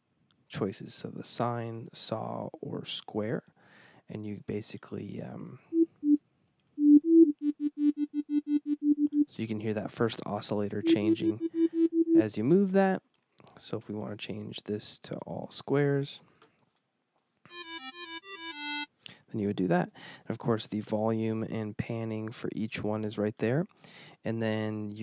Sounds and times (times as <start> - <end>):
Speech: 0.5 - 3.5, 4.1 - 5.7, 9.3 - 11.4, 12.2 - 16.3, 19.3 - 25.0
Synthesizer: 10.8 - 12.2.